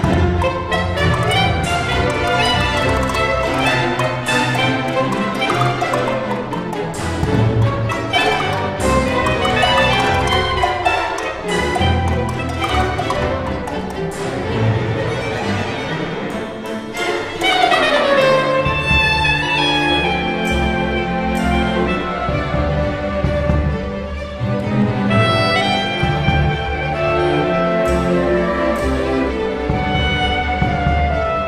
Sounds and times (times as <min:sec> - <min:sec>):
Wood block: 0:00.0 - 0:15.2, 0:16.4 - 0:18.1.